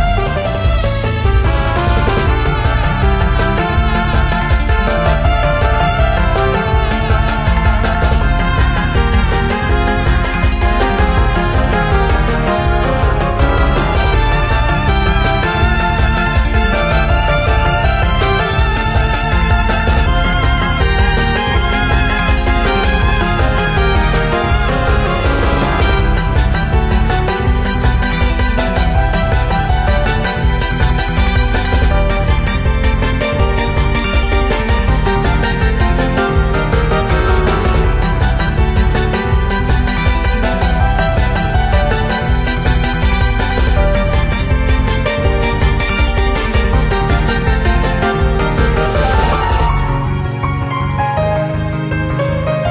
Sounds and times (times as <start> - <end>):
Music: 0.0 - 52.7.